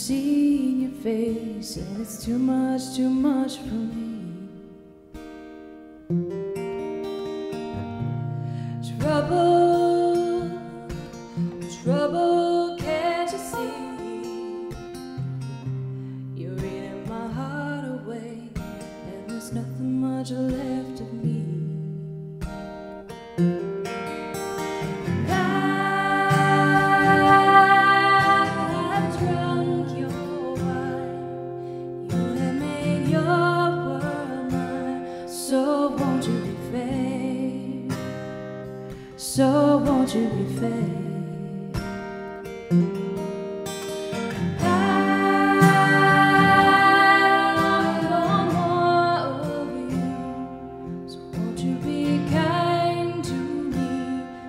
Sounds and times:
Music: 0.0s - 54.4s.

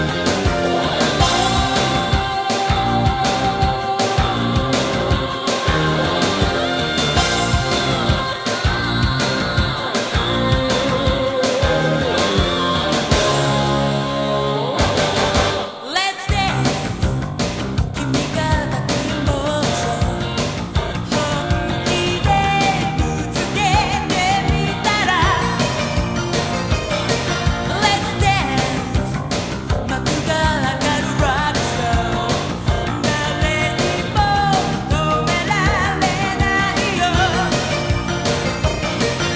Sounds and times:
Pop music: 0.0s - 39.3s.

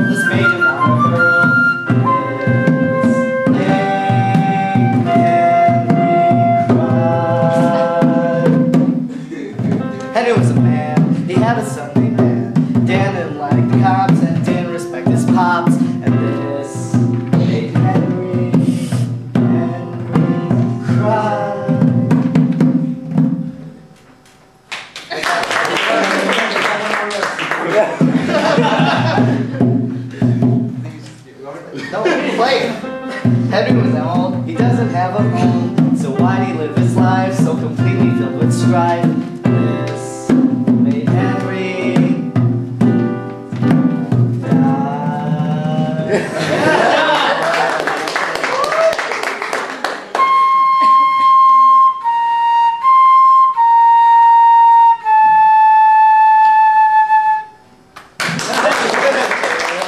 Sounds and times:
Musical instrument: 0.0s - 24.7s, 32.0s - 47.2s, 49.9s - 58.0s.

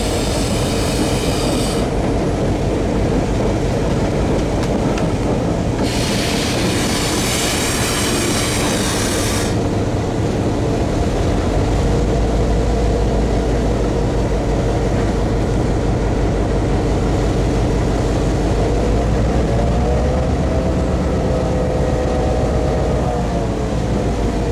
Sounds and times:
Railroad car, train wagon: 0.0s - 24.5s
Train: 0.0s - 24.5s.

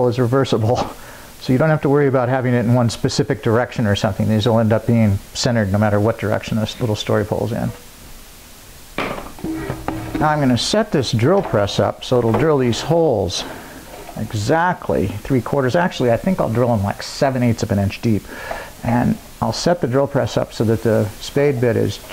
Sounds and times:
Speech: 0.0s - 7.8s, 10.2s - 13.5s, 14.2s - 22.1s.

